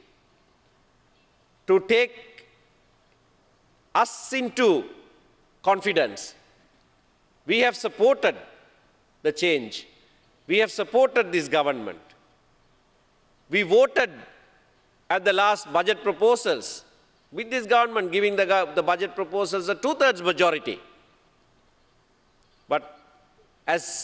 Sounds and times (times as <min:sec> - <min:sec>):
Male speech, man speaking: 0:01.7 - 0:02.1, 0:04.0 - 0:04.9, 0:05.7 - 0:06.4, 0:07.5 - 0:08.4, 0:10.5 - 0:12.0, 0:13.5 - 0:14.2, 0:15.1 - 0:20.8, 0:23.7 - 0:24.0.